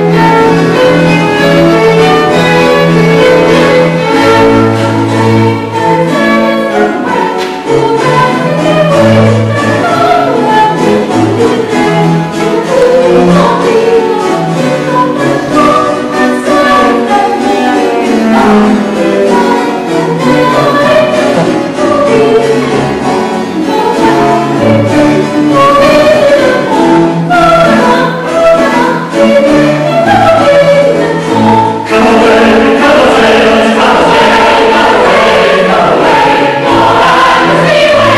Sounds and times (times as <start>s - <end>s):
Choir: 0.0s - 38.1s
Inside, large room or hall: 0.0s - 38.1s
Vocal music: 0.0s - 38.1s.